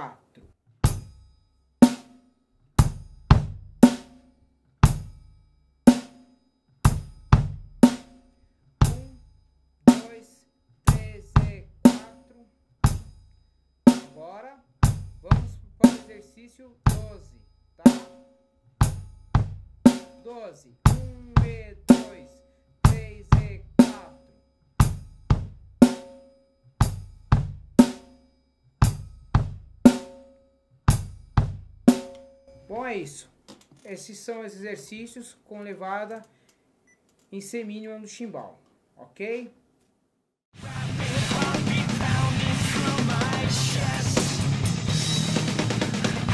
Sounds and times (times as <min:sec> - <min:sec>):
Speech: 0:00.0 - 0:00.5, 0:08.9 - 0:09.2, 0:09.9 - 0:12.5, 0:14.1 - 0:18.1, 0:20.2 - 0:24.2, 0:32.6 - 0:36.3, 0:37.3 - 0:39.6
Bass drum: 0:00.8 - 0:01.3, 0:02.8 - 0:04.2, 0:04.8 - 0:05.3, 0:06.9 - 0:08.1, 0:08.8 - 0:09.4, 0:10.9 - 0:12.1, 0:12.8 - 0:13.3, 0:14.8 - 0:16.0, 0:16.9 - 0:17.4, 0:18.8 - 0:20.2, 0:20.9 - 0:22.2, 0:22.9 - 0:24.2, 0:24.8 - 0:26.0, 0:26.8 - 0:28.0, 0:28.8 - 0:30.2, 0:30.9 - 0:32.2, 0:40.6 - 0:46.3
Drum kit: 0:00.8 - 0:05.3, 0:05.9 - 0:13.3, 0:13.9 - 0:18.2, 0:18.8 - 0:28.2, 0:28.8 - 0:30.3, 0:30.9 - 0:33.8, 0:40.6 - 0:46.3.